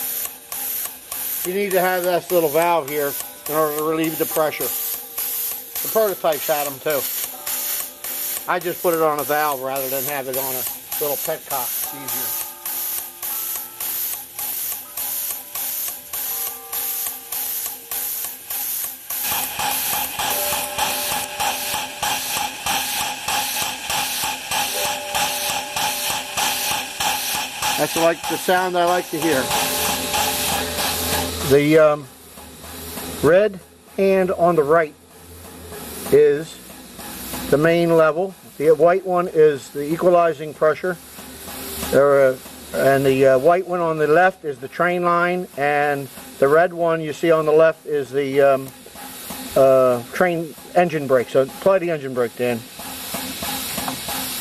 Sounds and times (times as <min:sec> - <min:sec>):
Train: 0:00.0 - 0:01.5, 0:02.3 - 0:38.6, 0:40.0 - 0:43.5, 0:45.3 - 0:47.9, 0:48.6 - 0:54.4
Steam: 0:00.0 - 0:54.4
Speech: 0:01.5 - 0:04.7, 0:05.9 - 0:07.1, 0:08.5 - 0:12.3, 0:27.8 - 0:29.5, 0:31.5 - 0:32.1, 0:33.3 - 0:35.0, 0:36.1 - 0:36.6, 0:37.5 - 0:41.0, 0:41.9 - 0:48.7, 0:49.6 - 0:52.7.